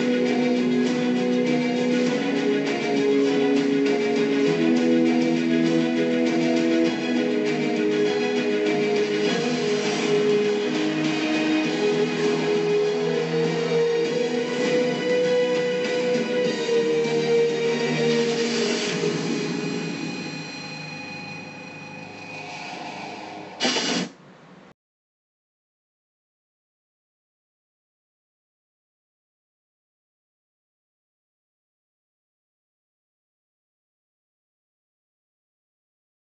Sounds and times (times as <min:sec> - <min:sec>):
Theme music: 0:00.0 - 0:24.1.